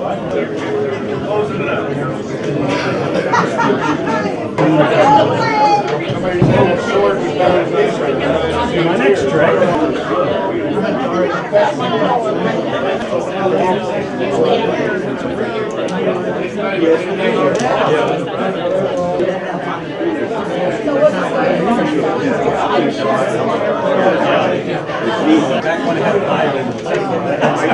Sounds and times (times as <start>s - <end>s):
Speech: 0.0s - 27.7s.